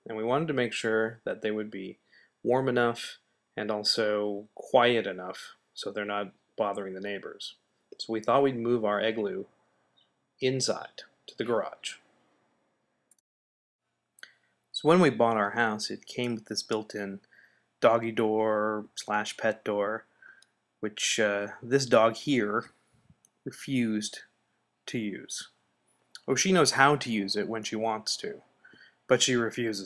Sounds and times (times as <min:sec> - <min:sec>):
Speech: 0:00.0 - 0:09.5, 0:10.4 - 0:12.0, 0:14.8 - 0:17.2, 0:17.8 - 0:20.1, 0:20.8 - 0:22.7, 0:23.5 - 0:24.3, 0:24.9 - 0:25.5, 0:26.2 - 0:28.4, 0:29.1 - 0:29.8.